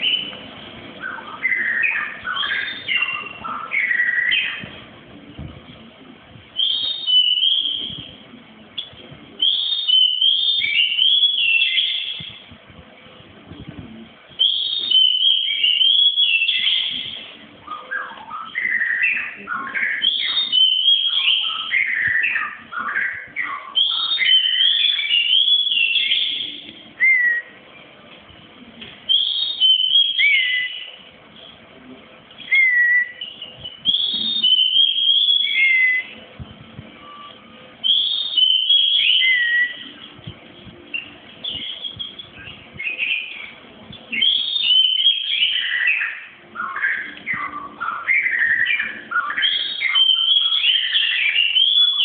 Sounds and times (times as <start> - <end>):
Bird: 0.0 - 4.8, 8.8 - 12.4, 14.4 - 27.6, 37.0 - 52.0
Inside, small room: 0.0 - 52.0.